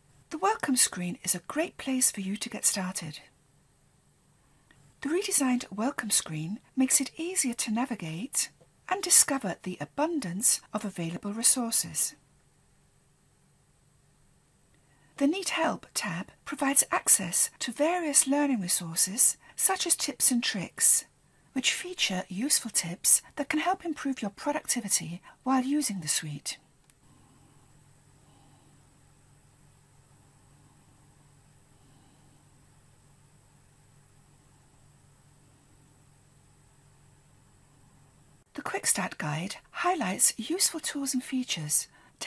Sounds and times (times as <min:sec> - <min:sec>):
Speech: 0:00.4 - 0:03.3, 0:05.0 - 0:12.2, 0:15.2 - 0:26.6, 0:38.6 - 0:42.2.